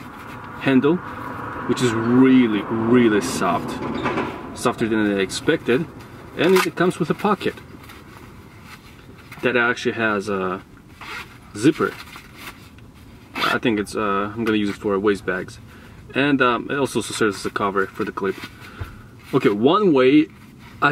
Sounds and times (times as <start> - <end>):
Speech: 0.6 - 1.0, 1.7 - 3.8, 4.6 - 7.6, 9.4 - 10.6, 11.5 - 12.0, 13.4 - 18.4, 19.3 - 20.9.